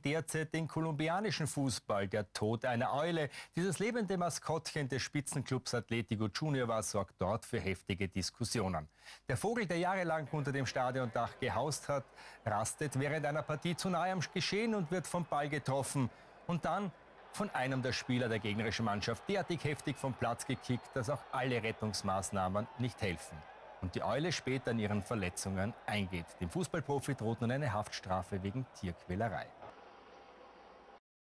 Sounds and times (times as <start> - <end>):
Speech: 0.0 - 29.6.